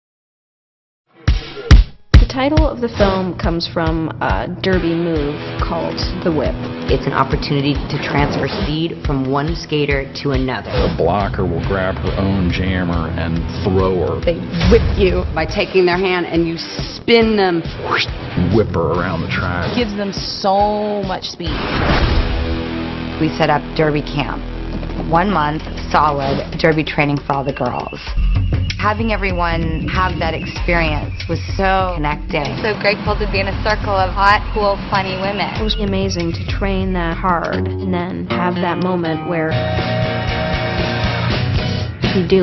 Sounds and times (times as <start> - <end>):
Music: 1.1 - 42.4
Speech: 1.5 - 21.6, 23.2 - 24.4, 25.0 - 28.1, 28.7 - 39.6, 42.2 - 42.4.